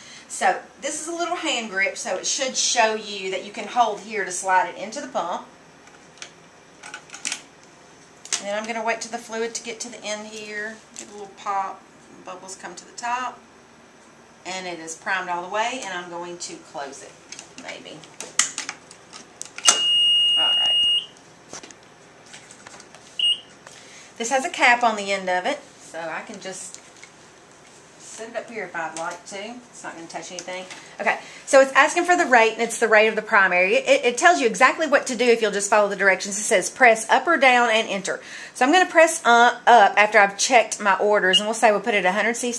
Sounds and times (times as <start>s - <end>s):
Speech: 0.3s - 5.5s, 8.4s - 13.4s, 14.4s - 18.1s, 24.2s - 26.8s, 28.1s - 42.5s.